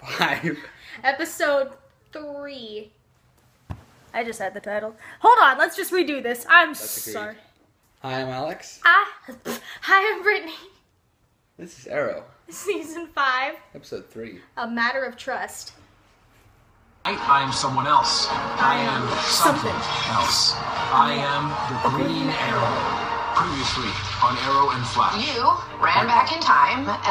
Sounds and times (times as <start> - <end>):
Music: 17.1 - 27.1.